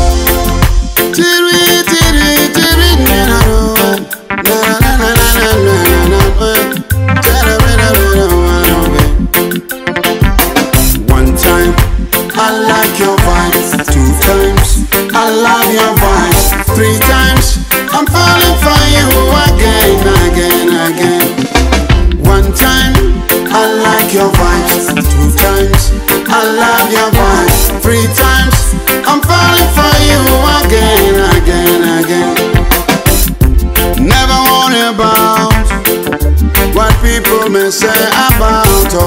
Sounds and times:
Afrobeat: 0.0 - 39.0
Reggae: 0.0 - 39.0.

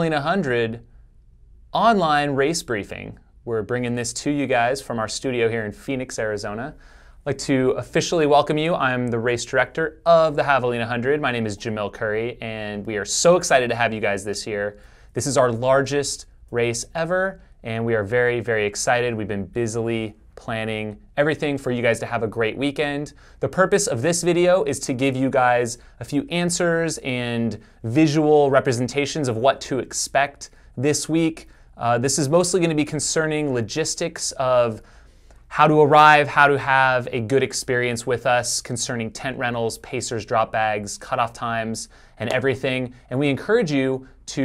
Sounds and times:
Speech: 0.0 - 0.9, 1.8 - 34.9, 35.5 - 44.4
Inside, small room: 0.0 - 44.4.

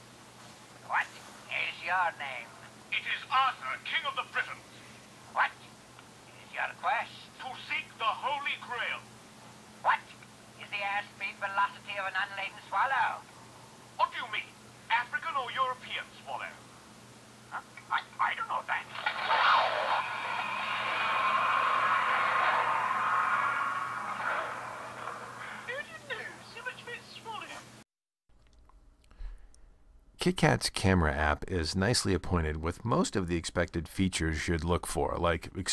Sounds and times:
Inside, small room: 0.0 - 35.7
Speech: 0.8 - 4.6, 6.3 - 9.1, 9.8 - 13.2, 14.0 - 16.6, 17.5 - 18.9, 30.2 - 35.7.

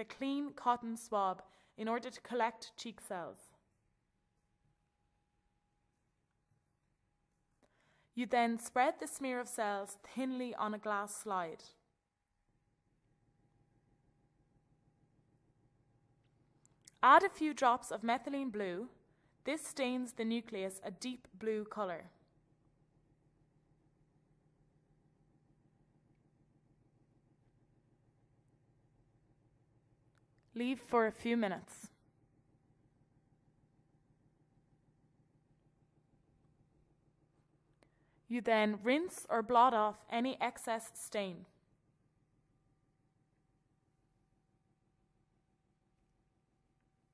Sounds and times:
Speech: 0.0 - 3.5, 8.2 - 11.8, 16.9 - 22.1, 30.6 - 31.9, 38.3 - 41.5
Silence: 3.5 - 8.2, 11.8 - 17.0, 22.1 - 30.6, 31.9 - 38.3, 41.5 - 47.1.

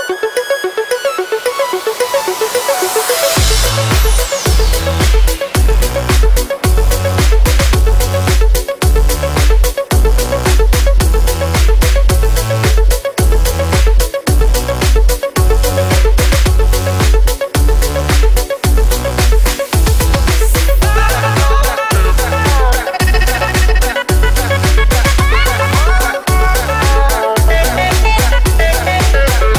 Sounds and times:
Music: 0.0 - 29.5.

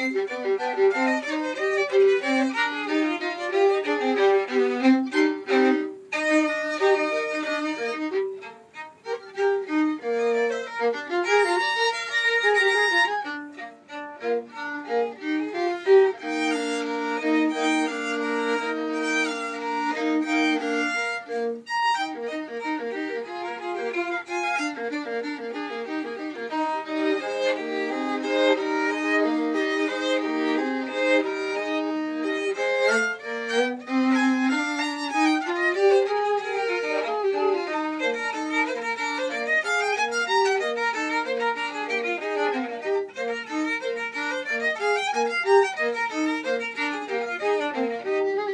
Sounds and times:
Violin, fiddle: 0.0 - 48.5.

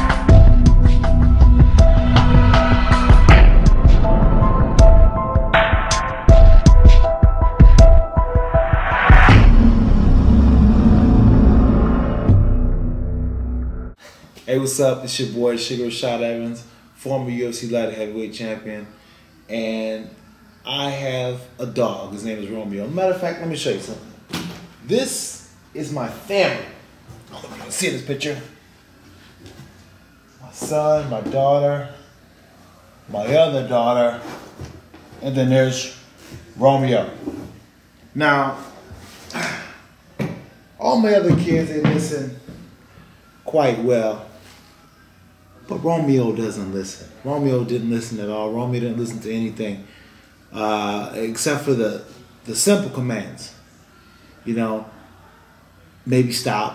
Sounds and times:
Speech: 14.5 - 24.1, 24.8 - 28.6, 30.4 - 32.0, 33.1 - 34.4, 35.2 - 36.0, 36.6 - 37.3, 38.2 - 38.8, 40.8 - 42.4, 43.4 - 44.4, 45.6 - 49.9, 50.5 - 53.6, 54.4 - 55.0, 56.0 - 56.7.

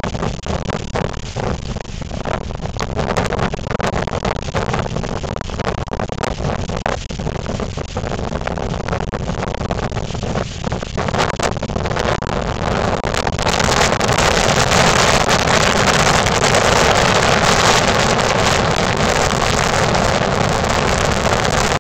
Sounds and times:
Wind noise (microphone): 0.0 - 21.8.

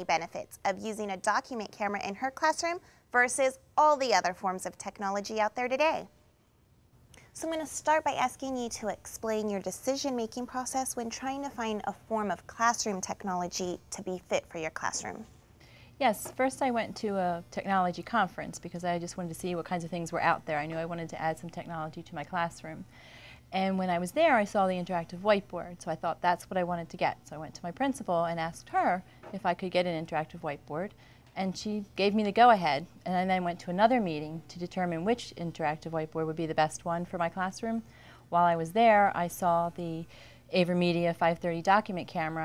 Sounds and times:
Speech: 0.0 - 6.1, 7.4 - 15.3, 16.0 - 22.8, 23.6 - 42.4.

